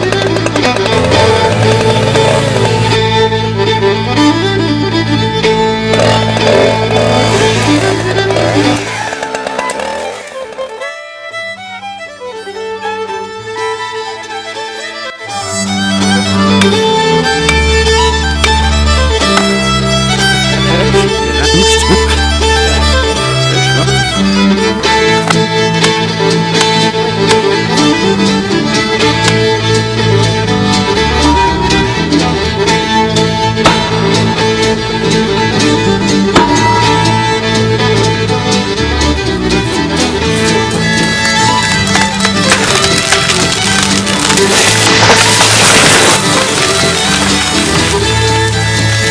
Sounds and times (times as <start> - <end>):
Violin, fiddle: 0.0 - 49.1.